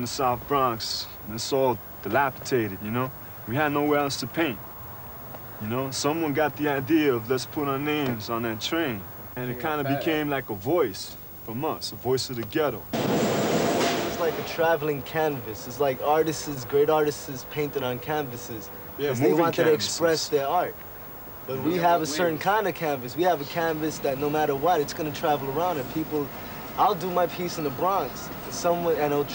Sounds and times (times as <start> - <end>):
Speech: 0.0 - 4.6, 5.6 - 12.9, 14.0 - 20.8, 21.4 - 29.3.